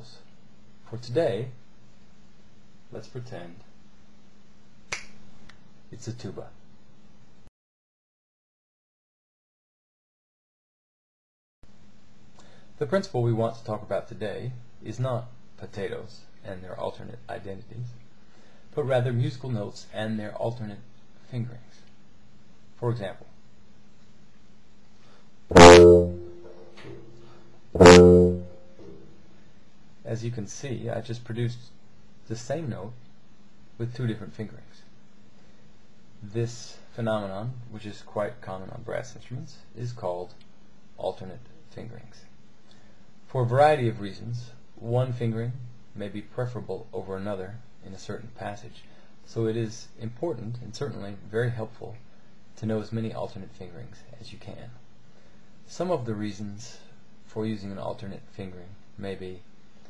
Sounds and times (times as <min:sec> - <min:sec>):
Speech: 0:00.0 - 0:01.6, 0:02.9 - 0:03.7, 0:05.9 - 0:06.6, 0:12.8 - 0:18.0, 0:18.7 - 0:21.9, 0:22.8 - 0:23.4, 0:30.0 - 0:33.0, 0:33.8 - 0:34.9, 0:36.2 - 0:40.4, 0:41.0 - 0:42.3, 0:43.3 - 0:52.0, 0:52.6 - 0:54.8, 0:55.6 - 0:59.5.